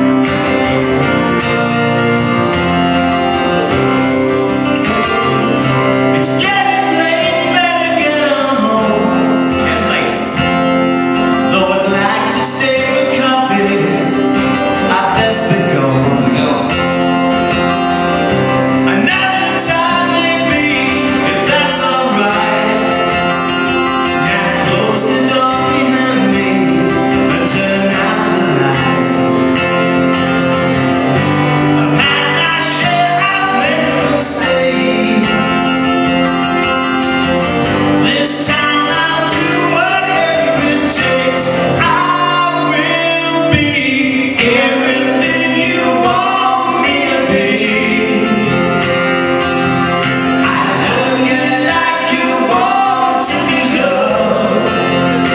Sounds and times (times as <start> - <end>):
Music: 0.0 - 55.3.